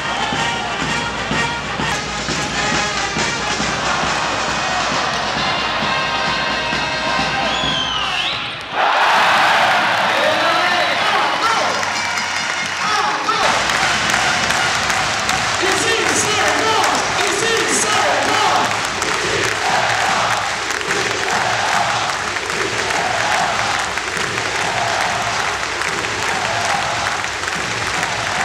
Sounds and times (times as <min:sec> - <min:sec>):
Music: 0:00.0 - 0:28.4
Speech: 0:10.1 - 0:11.9, 0:12.8 - 0:13.6, 0:15.6 - 0:18.7.